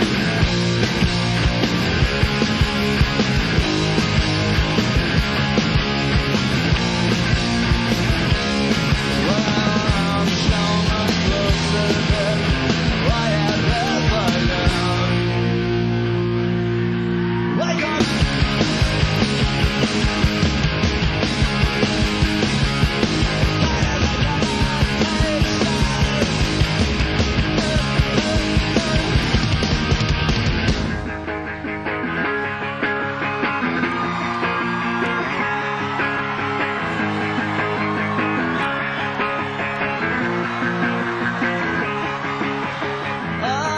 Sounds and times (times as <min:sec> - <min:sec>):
Music: 0:00.0 - 0:43.7.